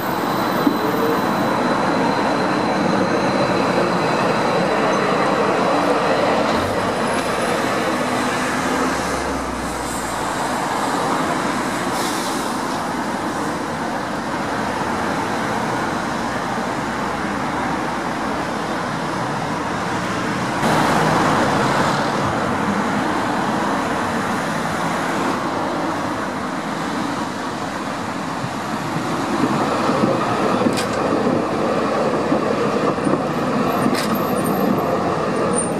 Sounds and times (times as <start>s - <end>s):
Vehicle: 0.0s - 35.8s.